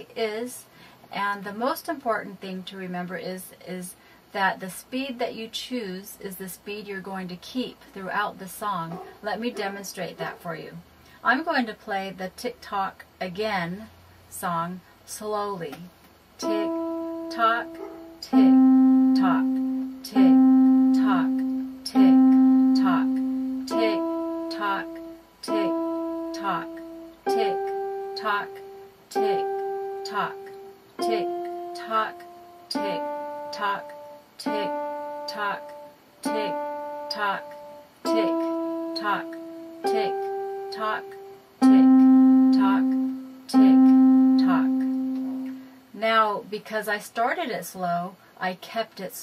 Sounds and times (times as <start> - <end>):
Speech: 0.0 - 16.7, 17.3 - 18.6, 19.2 - 22.1, 22.8 - 24.8, 25.4 - 25.7, 26.4 - 26.7, 27.3 - 29.4, 30.1 - 30.4, 31.0 - 34.7, 35.3 - 35.6, 36.3 - 37.5, 38.1 - 39.3, 39.9 - 41.8, 42.5 - 43.8, 44.4 - 44.8, 46.0 - 49.2
Music: 16.4 - 45.7.